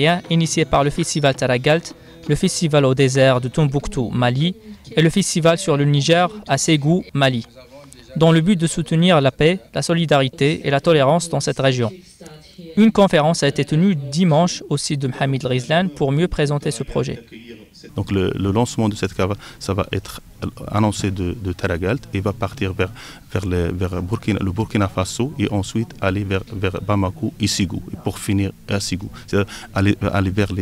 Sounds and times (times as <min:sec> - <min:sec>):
Speech: 0:00.0 - 0:30.6.